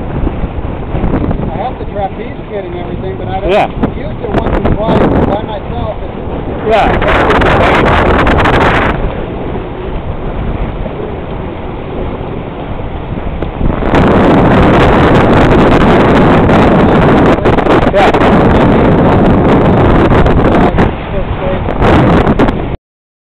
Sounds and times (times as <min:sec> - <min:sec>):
Sailboat, sailing ship: 0:00.0 - 0:22.8
Speech: 0:01.5 - 0:07.0, 0:21.1 - 0:21.7.